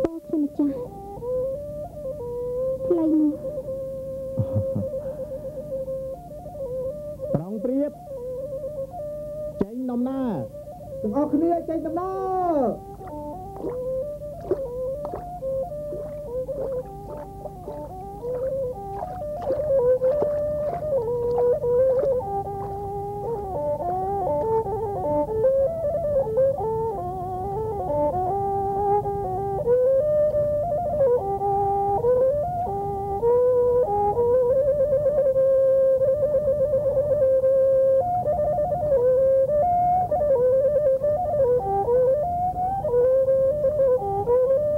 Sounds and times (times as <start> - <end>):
Music: 0.0 - 44.7.